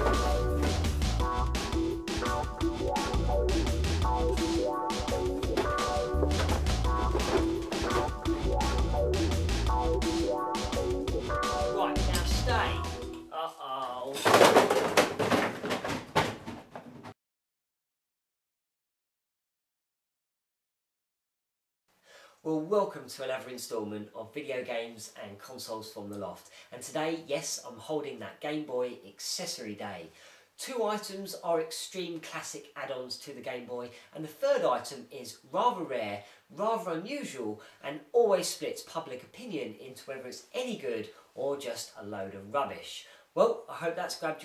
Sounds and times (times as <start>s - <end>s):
Music: 0.0s - 13.6s
Speech: 11.8s - 14.3s, 22.4s - 44.4s.